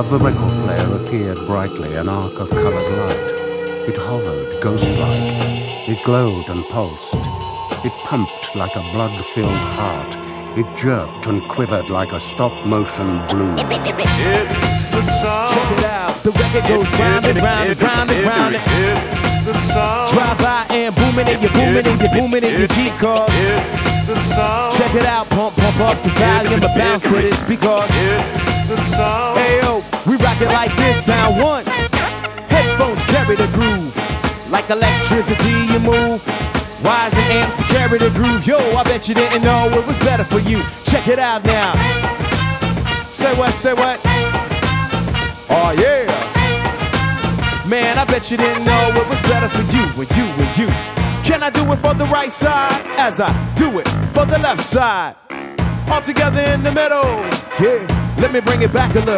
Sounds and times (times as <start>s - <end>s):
Music: 0.0s - 59.1s.